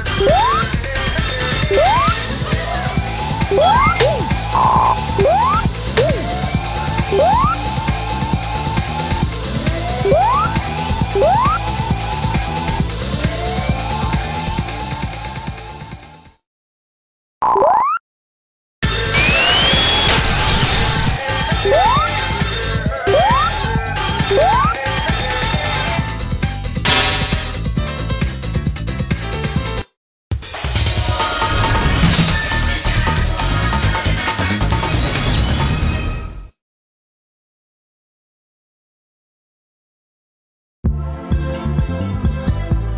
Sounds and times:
Music: 0:00.0 - 0:16.4, 0:18.8 - 0:36.6, 0:40.8 - 0:42.9.

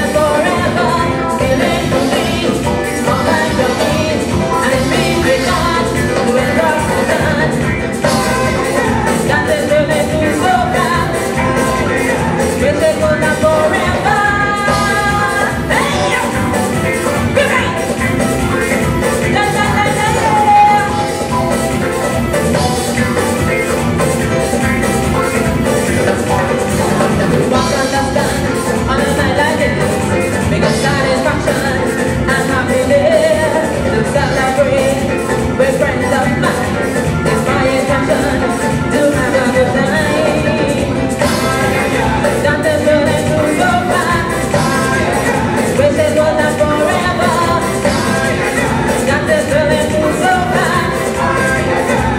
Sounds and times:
Female singing: 0:00.0 - 0:16.7, 0:19.2 - 0:21.3, 0:26.2 - 0:52.1
Music: 0:00.0 - 0:52.1.

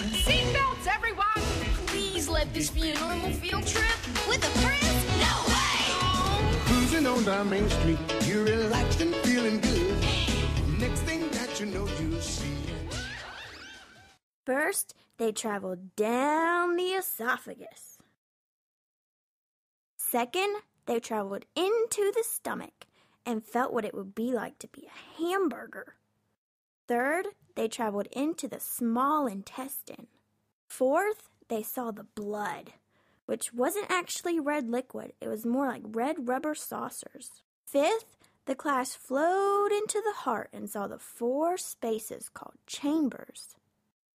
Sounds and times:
Speech: 0:00.2 - 0:06.3, 0:14.5 - 0:18.0, 0:20.0 - 0:26.0, 0:26.9 - 0:30.1, 0:30.7 - 0:43.6.

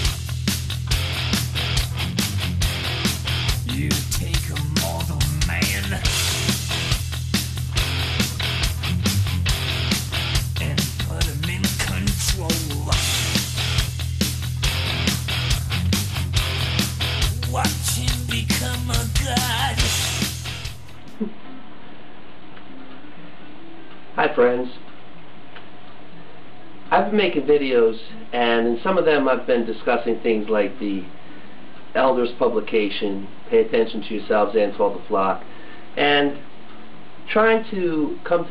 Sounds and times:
Speech: 0:03.6 - 0:06.2, 0:10.6 - 0:13.2, 0:17.4 - 0:19.7, 0:24.2 - 0:24.9, 0:26.9 - 0:31.1, 0:32.0 - 0:35.4, 0:36.0 - 0:36.4, 0:37.3 - 0:38.5.

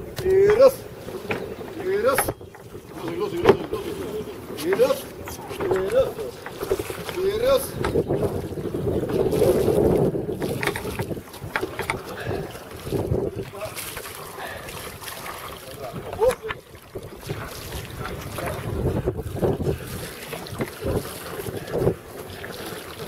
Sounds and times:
Sailboat, sailing ship: 0:00.0 - 0:23.0.

